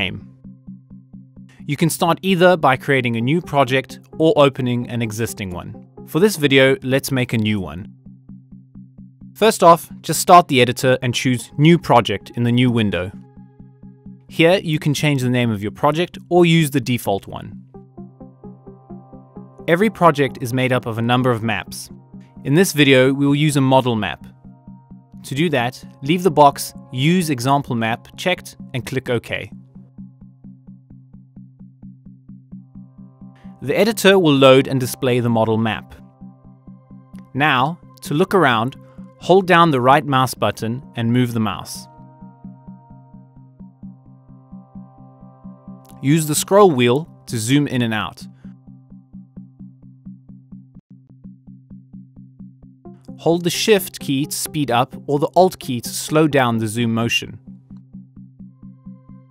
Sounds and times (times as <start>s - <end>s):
Speech: 0.0s - 0.2s, 1.6s - 7.9s, 9.4s - 13.2s, 14.3s - 17.6s, 19.7s - 24.3s, 25.2s - 29.5s, 33.6s - 36.0s, 37.3s - 41.9s, 45.9s - 48.3s, 53.2s - 57.4s
Music: 0.0s - 59.3s.